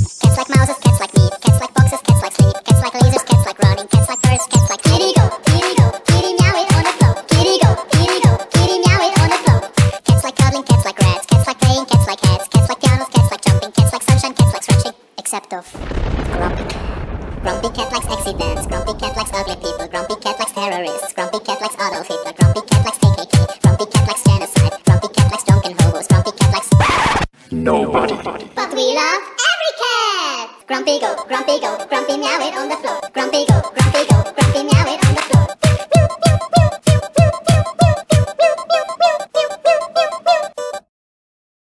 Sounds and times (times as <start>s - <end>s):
Music: 0.0s - 15.0s, 18.2s - 26.9s, 30.9s - 40.9s
Speech: 14.6s - 16.8s, 17.5s - 21.1s, 27.5s - 31.2s.